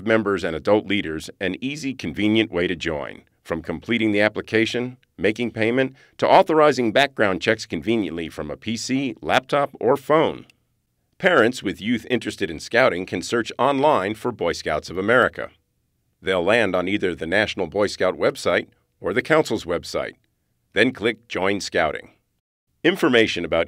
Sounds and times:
Speech: 0.0 - 10.5, 11.2 - 15.6, 16.2 - 22.2, 22.8 - 23.6.

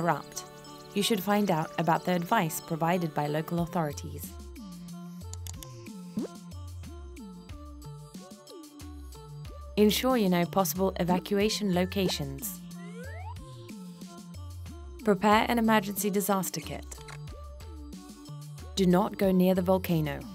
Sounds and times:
Speech: 0.0 - 4.3, 9.8 - 12.6, 15.0 - 17.0, 18.8 - 20.3
Music: 0.0 - 20.3.

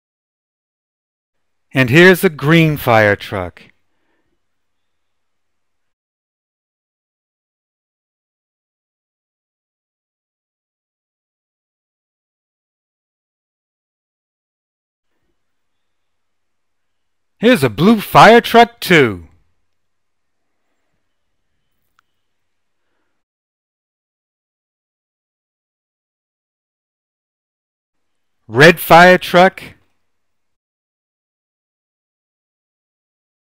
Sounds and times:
Speech: 1.8 - 3.8, 17.4 - 19.4, 28.5 - 29.8.

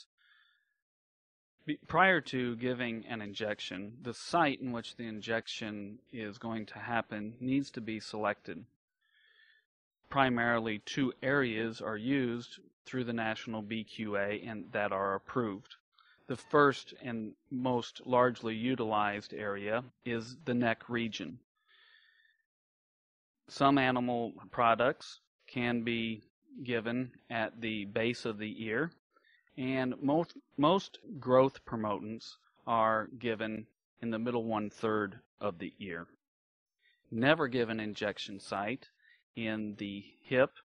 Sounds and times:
Speech: 1.6 - 8.7, 10.1 - 21.4, 23.5 - 29.0, 29.6 - 36.2, 37.1 - 40.6.

